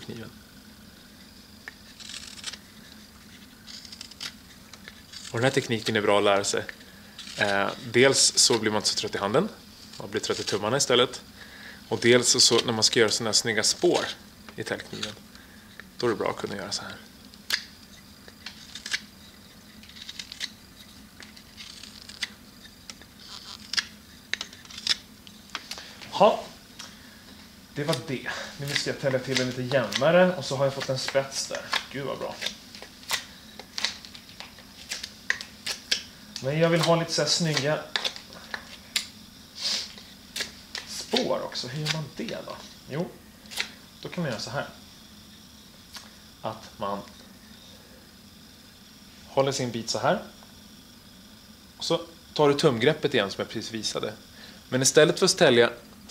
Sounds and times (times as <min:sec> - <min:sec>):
Speech: 0:00.0 - 0:00.4, 0:05.3 - 0:06.7, 0:07.4 - 0:11.3, 0:11.9 - 0:15.2, 0:16.0 - 0:17.1, 0:26.1 - 0:26.6, 0:27.8 - 0:32.5, 0:36.4 - 0:38.0, 0:41.0 - 0:43.2, 0:44.0 - 0:44.8, 0:46.4 - 0:47.2, 0:49.3 - 0:50.4, 0:51.8 - 0:55.8.